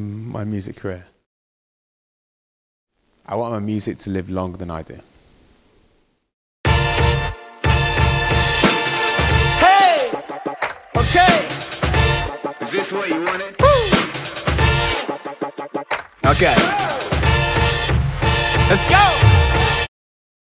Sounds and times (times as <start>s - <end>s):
Music: 6.7s - 19.9s.